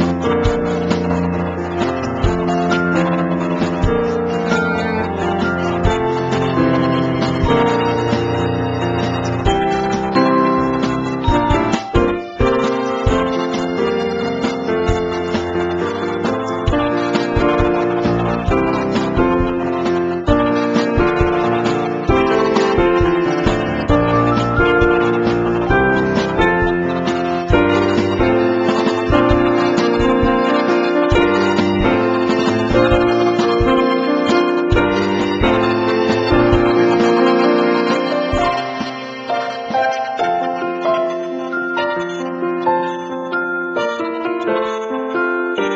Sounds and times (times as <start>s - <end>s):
Music: 0.0s - 45.7s.